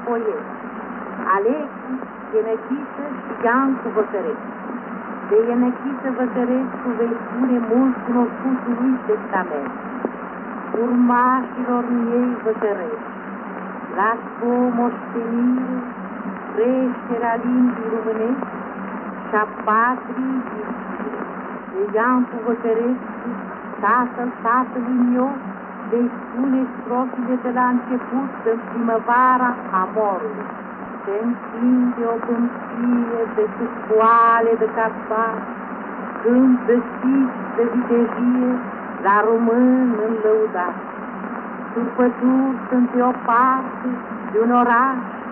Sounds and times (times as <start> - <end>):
Radio: 0.0 - 0.5, 1.2 - 13.2, 13.9 - 35.5, 36.1 - 45.3
Speech: 0.0 - 0.5, 1.2 - 4.4, 5.3 - 9.8, 10.8 - 13.0, 13.9 - 15.9, 16.5 - 18.5, 19.3 - 30.5, 31.1 - 35.4, 36.2 - 40.8, 41.8 - 45.2.